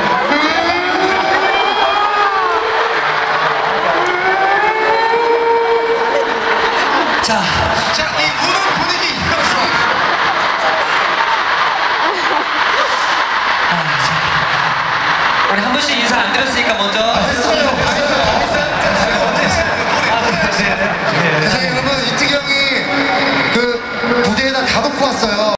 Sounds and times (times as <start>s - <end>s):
Speech: 15.5s - 25.5s.